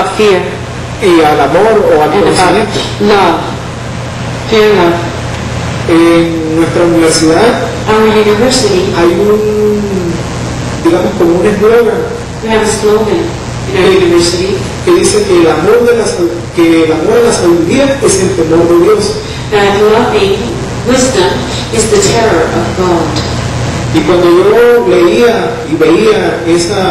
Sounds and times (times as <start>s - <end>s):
Male speech, man speaking: 0.0s - 3.6s, 4.5s - 5.1s, 5.9s - 10.2s, 10.8s - 23.0s, 23.9s - 26.9s.